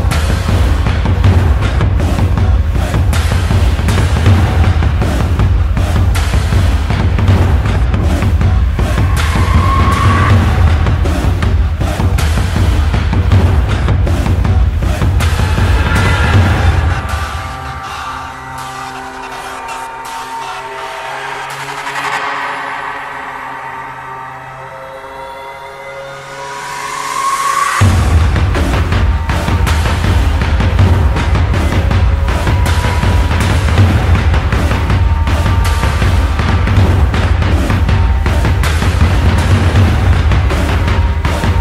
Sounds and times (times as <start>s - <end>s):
Music: 0.0s - 41.6s.